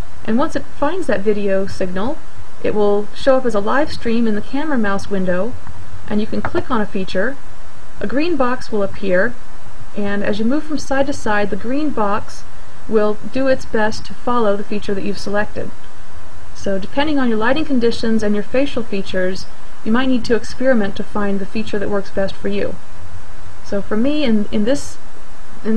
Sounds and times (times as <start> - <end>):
Speech: 0.2 - 7.4, 8.0 - 9.4, 10.0 - 15.7, 16.6 - 22.8, 23.7 - 25.0.